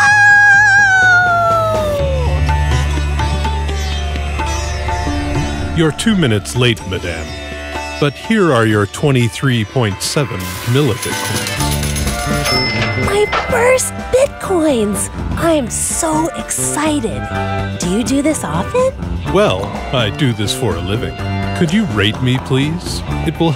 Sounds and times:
Sitar: 2.3s - 23.5s.

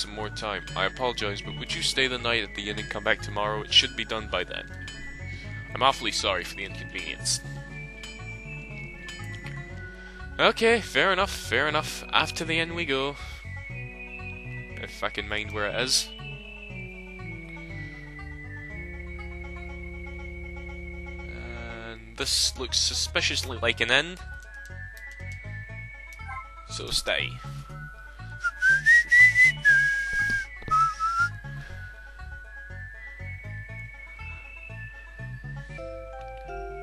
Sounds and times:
Whistle: 15.8s - 21.6s, 28.4s - 31.6s
Whistling: 15.9s - 21.3s, 28.4s - 31.6s.

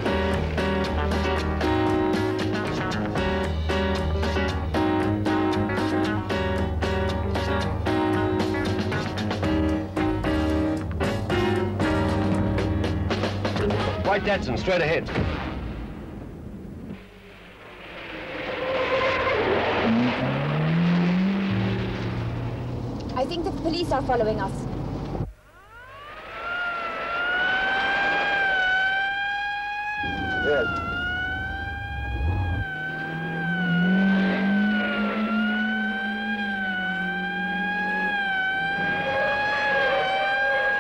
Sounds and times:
Car passing by: 17.9s - 22.9s
Police car (siren): 25.6s - 40.8s.

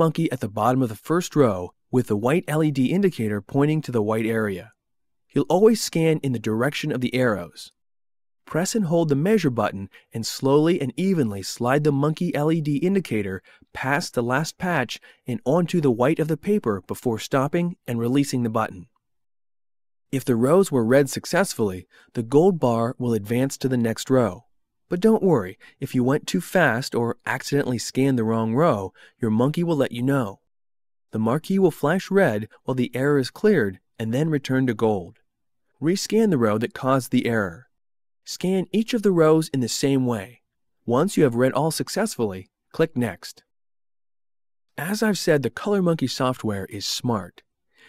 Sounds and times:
Speech: 0.0s - 4.8s, 5.4s - 7.8s, 8.5s - 18.9s, 20.2s - 30.5s, 31.2s - 35.2s, 35.8s - 37.7s, 38.3s - 43.5s, 44.8s - 47.4s.

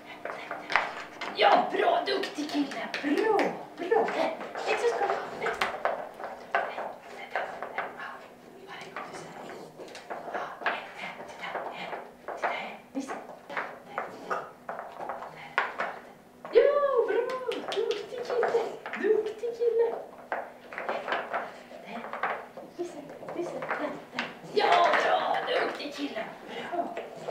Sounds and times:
Speech: 0.4s - 5.8s, 10.3s - 14.1s, 16.5s - 20.1s, 21.8s - 27.0s.

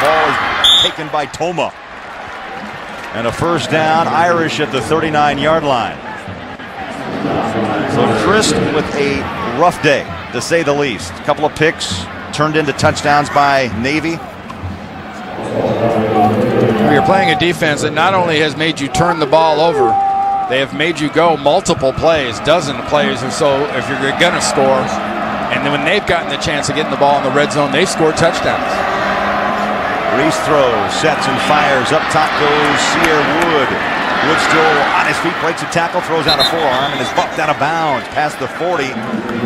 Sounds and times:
Speech: 0.0s - 1.8s, 3.1s - 6.2s, 7.8s - 14.3s, 16.8s - 28.8s, 30.1s - 39.0s.

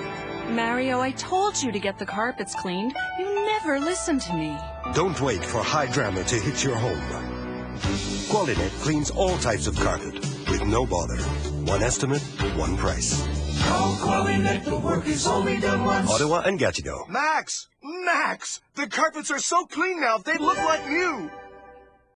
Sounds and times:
Music: 0.0s - 16.5s, 20.3s - 22.1s
Speech: 8.3s - 13.2s, 16.1s - 21.3s.

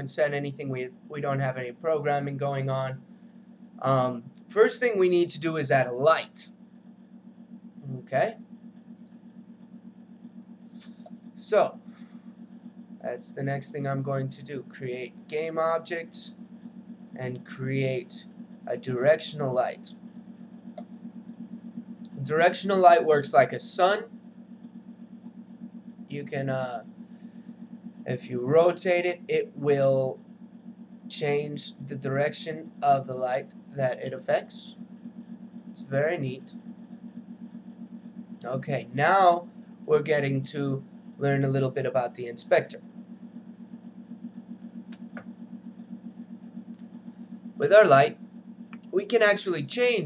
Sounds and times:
Speech: 0.0s - 3.0s, 3.8s - 6.5s, 7.8s - 8.4s, 11.4s - 11.8s, 13.0s - 16.3s, 17.2s - 19.9s, 22.1s - 24.1s, 26.1s - 26.9s, 28.1s - 30.2s, 31.1s - 34.8s, 35.8s - 36.5s, 38.4s - 42.8s, 47.6s - 48.2s, 49.0s - 50.0s.

